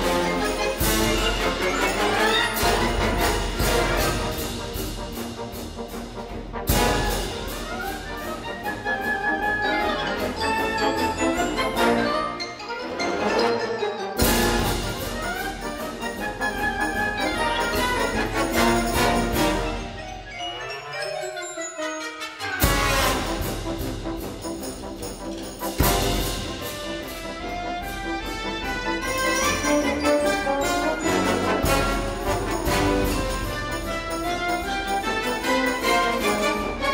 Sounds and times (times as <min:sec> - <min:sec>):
Music: 0:00.0 - 0:36.9.